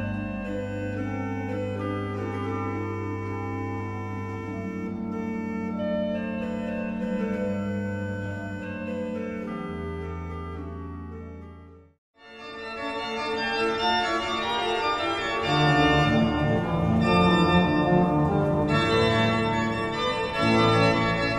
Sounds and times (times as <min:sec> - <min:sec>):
Hammond organ: 0:00.0 - 0:11.8, 0:12.4 - 0:21.3.